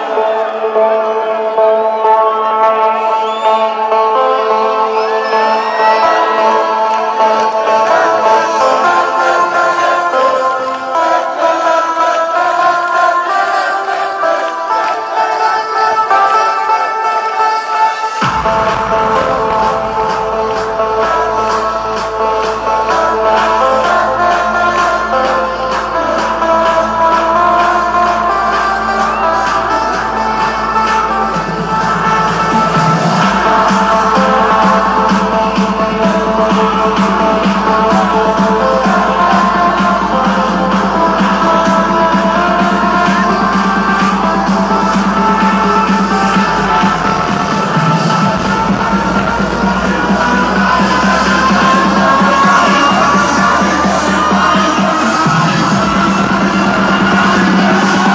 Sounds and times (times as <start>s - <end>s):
Music: 0.0s - 58.1s.